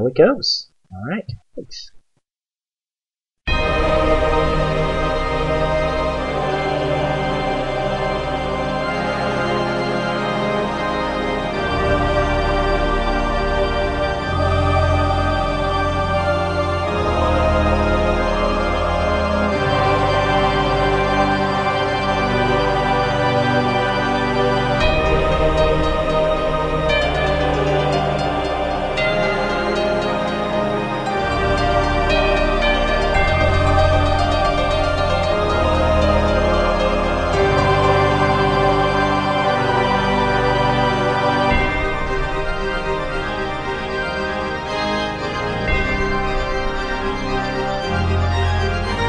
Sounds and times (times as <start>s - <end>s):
Music: 3.5s - 49.0s.